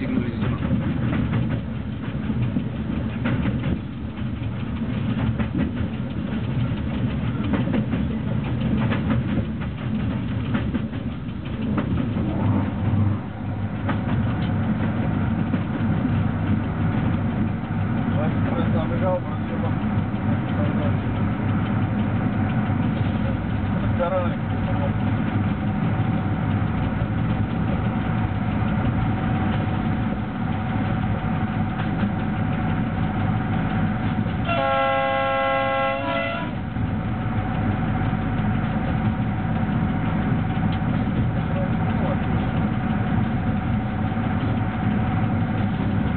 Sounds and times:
Outside, rural or natural: 0:00.0 - 0:46.1
Train whistle: 0:34.4 - 0:36.6.

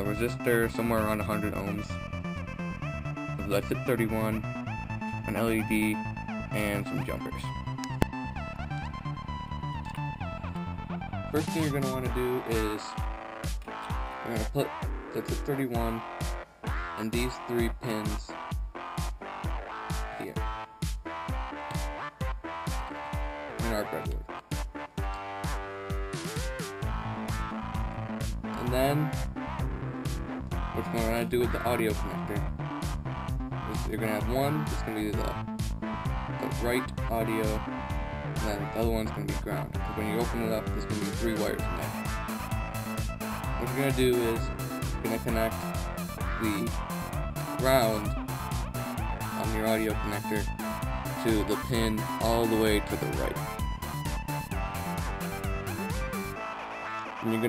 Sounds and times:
Speech: 0:00.0 - 0:01.9, 0:03.4 - 0:04.4, 0:05.3 - 0:07.5, 0:11.3 - 0:13.0, 0:14.2 - 0:16.0, 0:17.0 - 0:18.4, 0:20.2 - 0:20.4, 0:23.6 - 0:24.2, 0:28.6 - 0:29.1, 0:30.8 - 0:32.4, 0:33.7 - 0:35.4, 0:36.4 - 0:37.6, 0:38.4 - 0:42.0, 0:43.6 - 0:45.6, 0:46.3 - 0:46.7, 0:47.6 - 0:48.1, 0:49.4 - 0:50.5, 0:51.2 - 0:53.4, 0:57.2 - 0:57.4
Music: 0:00.0 - 0:57.4.

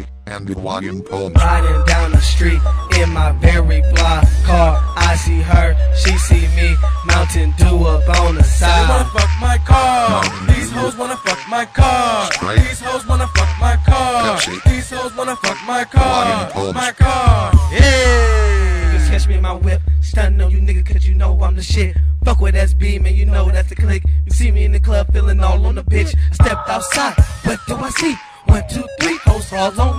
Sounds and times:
Speech: 0:00.0 - 0:01.8, 0:04.5 - 0:05.4, 0:08.1 - 0:09.4, 0:10.0 - 0:11.0, 0:12.2 - 0:12.8, 0:14.0 - 0:14.7, 0:16.0 - 0:22.0, 0:23.0 - 0:26.2
Music: 0:00.8 - 0:19.6, 0:25.8 - 0:29.9.

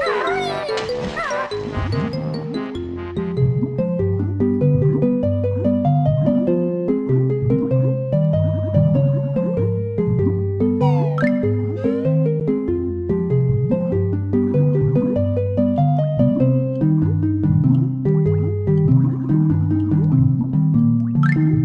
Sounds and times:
Music: 0:00.0 - 0:21.6.

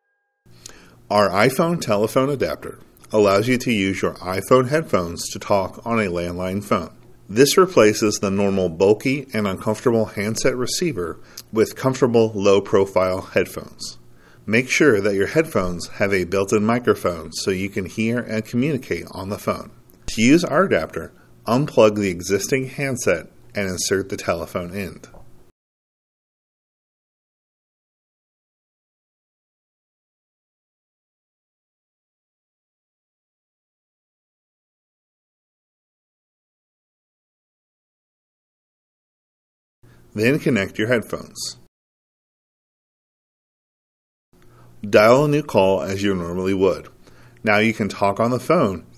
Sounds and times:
Speech: 0:01.1 - 0:25.2, 0:40.2 - 0:41.7, 0:44.8 - 0:48.9.

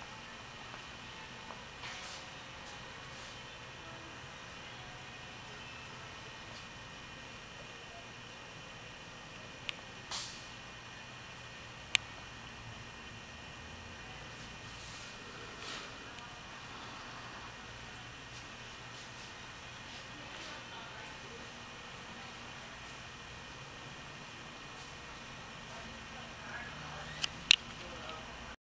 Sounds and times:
Speech: 0:19.9 - 0:23.1, 0:25.6 - 0:28.6.

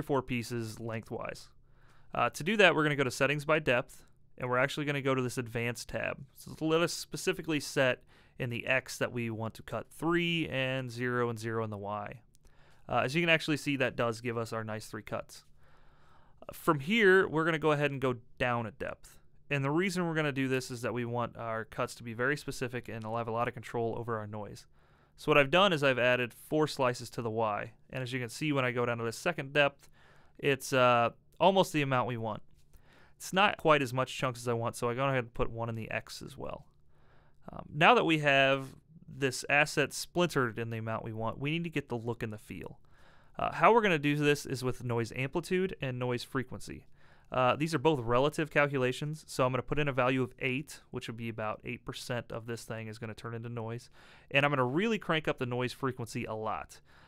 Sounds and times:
Speech: 0:00.0 - 0:12.3, 0:12.9 - 0:15.5, 0:16.4 - 0:32.5, 0:33.2 - 0:36.7, 0:37.5 - 0:42.8, 0:43.4 - 0:56.8.

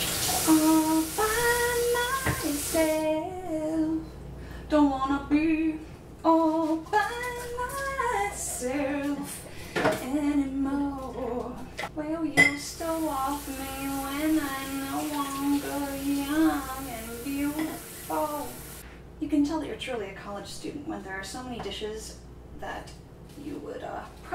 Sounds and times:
Sink (filling or washing): 0:00.0 - 0:03.1, 0:12.8 - 0:18.8
Water: 0:13.4 - 0:18.6.

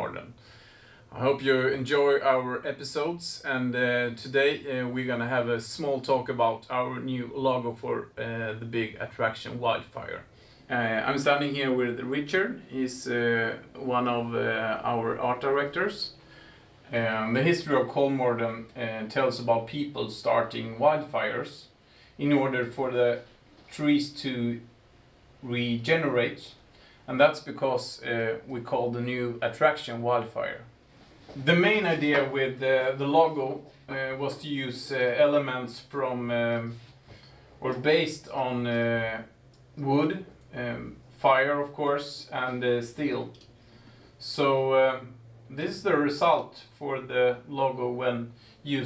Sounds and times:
Speech: 0:00.0 - 0:00.4, 0:01.1 - 0:16.2, 0:16.9 - 0:24.7, 0:25.4 - 0:30.7, 0:31.3 - 0:36.9, 0:37.6 - 0:43.5, 0:44.2 - 0:48.8.

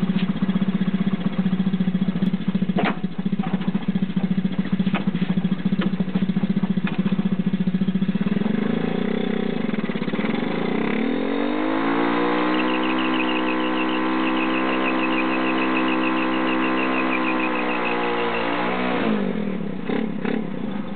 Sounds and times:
Motorcycle: 0:00.0 - 0:20.9.

